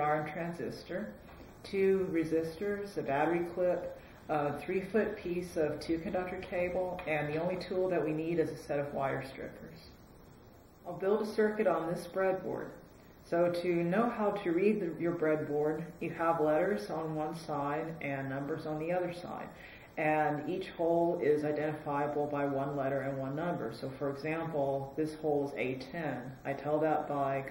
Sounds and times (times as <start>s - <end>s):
Speech: 0.0s - 9.9s, 10.8s - 27.5s.